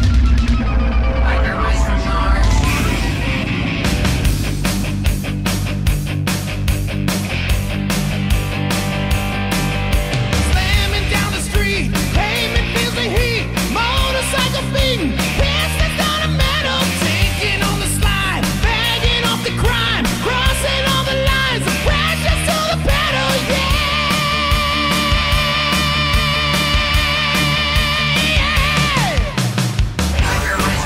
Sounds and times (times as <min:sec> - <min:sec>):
Music: 0:00.0 - 0:30.8.